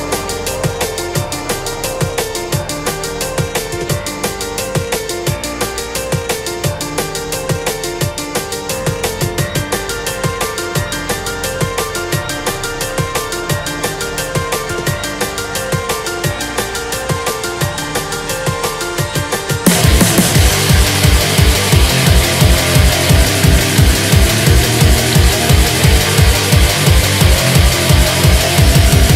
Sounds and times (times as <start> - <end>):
Music: 0.0 - 29.1.